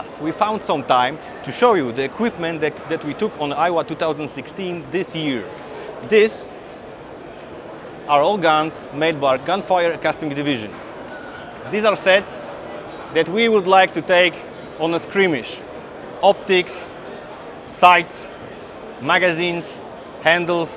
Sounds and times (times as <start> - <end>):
Speech: 0.0 - 6.5, 8.1 - 10.7, 11.7 - 12.4, 13.1 - 15.6, 16.2 - 16.9, 17.7 - 18.3, 19.0 - 20.7.